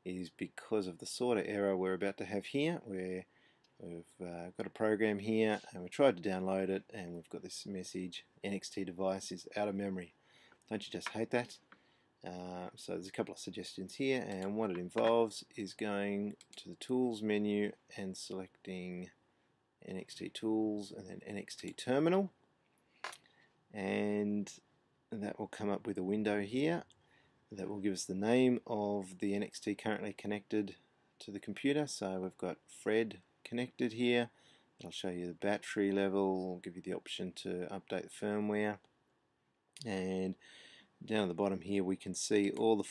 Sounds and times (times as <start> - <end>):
Speech: 0.0 - 11.6, 12.2 - 19.1, 19.8 - 22.3, 23.8 - 26.9, 27.5 - 38.8, 39.8 - 40.4, 41.0 - 42.9.